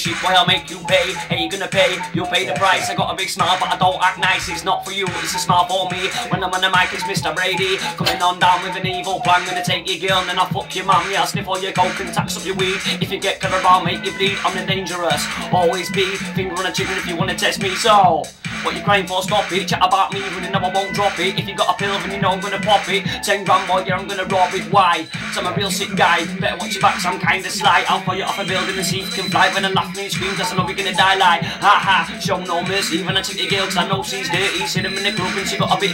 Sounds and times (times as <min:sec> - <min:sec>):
Music: 0:00.0 - 0:35.9.